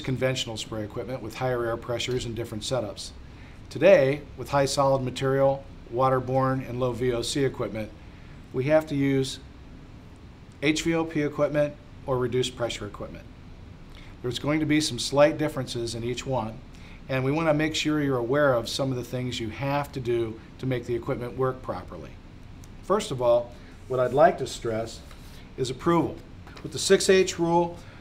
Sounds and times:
Speech: 0.0 - 9.5, 10.6 - 13.3, 14.2 - 22.2, 22.8 - 27.8.

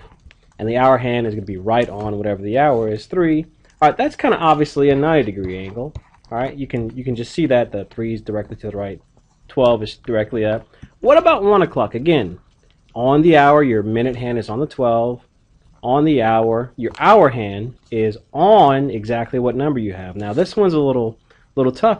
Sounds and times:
Speech: 0.6 - 12.4, 13.0 - 21.9.

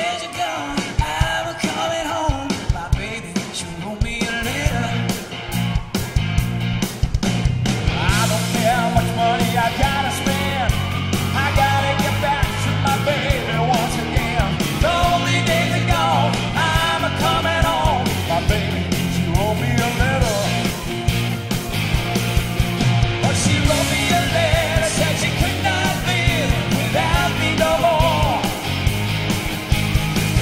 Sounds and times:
Singing: 0.0 - 5.2, 8.0 - 20.8, 23.2 - 28.7
Rock music: 0.0 - 30.4.

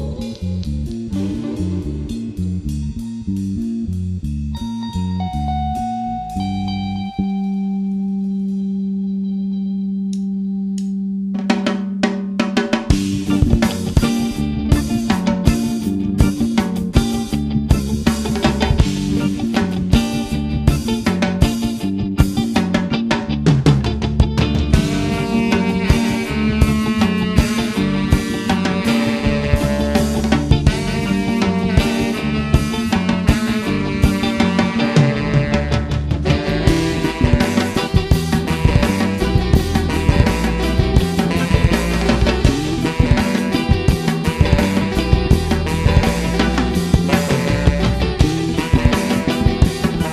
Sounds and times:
Punk rock: 11.4 - 50.1.

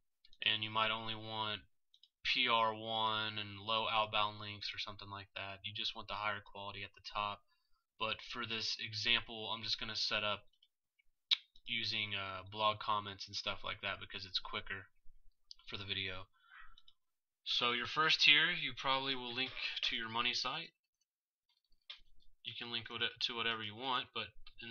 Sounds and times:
Speech: 0.3 - 10.5, 11.3 - 16.4, 17.4 - 20.8, 22.4 - 24.7.

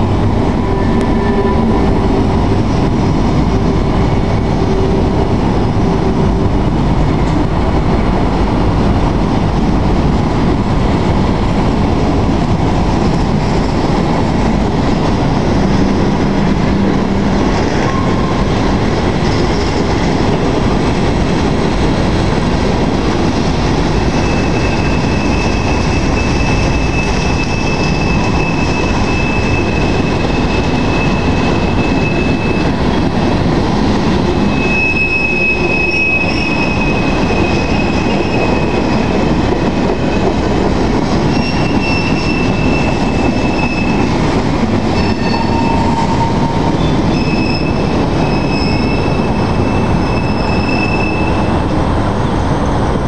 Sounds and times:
Railroad car, train wagon: 0.0 - 53.0
Train: 0.0 - 53.0
Clickety-clack: 2.3 - 34.4, 35.5 - 51.5.

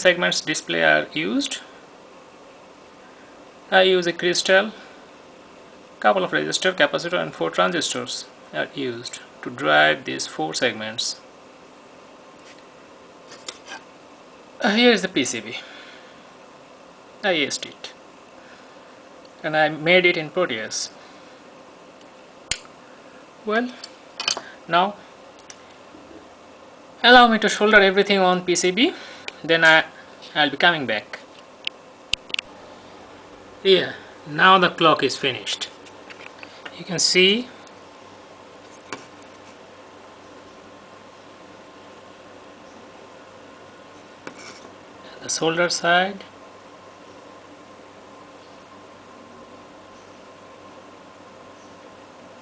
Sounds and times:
Speech: 0.0 - 1.7, 3.7 - 4.9, 6.0 - 11.2, 14.6 - 15.7, 17.2 - 18.0, 19.4 - 21.0, 23.4 - 23.8, 24.7 - 25.0, 27.0 - 31.3, 33.6 - 35.8, 36.7 - 37.6, 45.1 - 46.3.

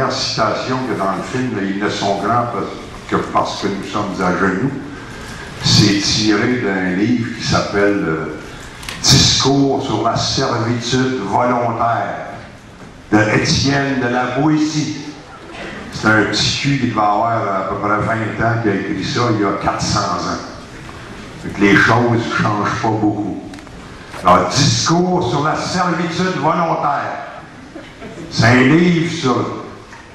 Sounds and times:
Male speech, man speaking: 0.0 - 4.8, 5.6 - 8.4, 9.0 - 12.4, 13.1 - 15.2, 16.0 - 20.6, 21.4 - 23.6, 24.2 - 27.4, 28.3 - 29.8
Narration, monologue: 0.0 - 30.1.

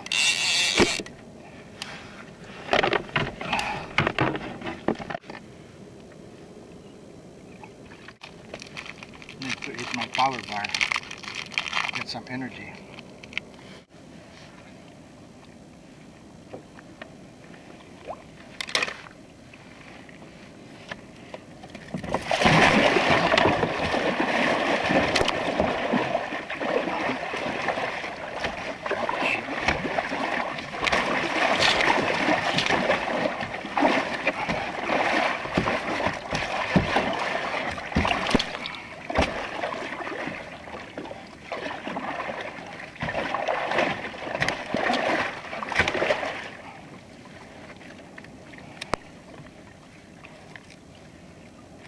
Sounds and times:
Rowboat, canoe, kayak: 0.0 - 51.8.

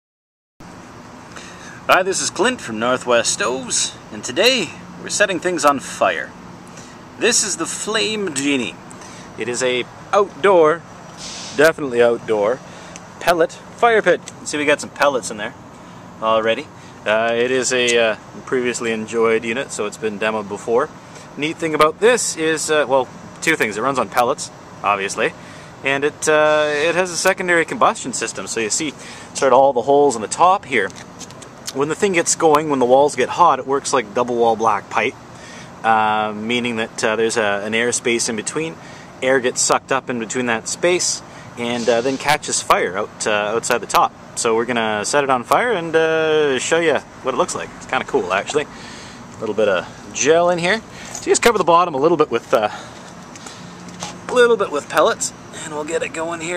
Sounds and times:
Speech: 1.9 - 6.4, 7.2 - 8.8, 9.4 - 10.8, 11.6 - 12.6, 13.2 - 15.6, 16.2 - 31.0, 31.7 - 35.2, 35.8 - 48.7, 49.4 - 52.9, 54.3 - 56.5.

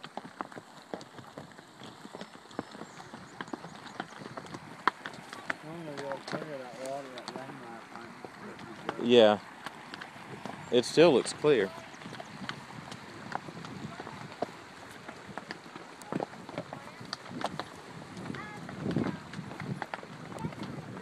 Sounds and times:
Horse: 0.0 - 21.0
Outside, rural or natural: 0.0 - 21.0
Speech: 5.6 - 9.4, 10.7 - 11.8.

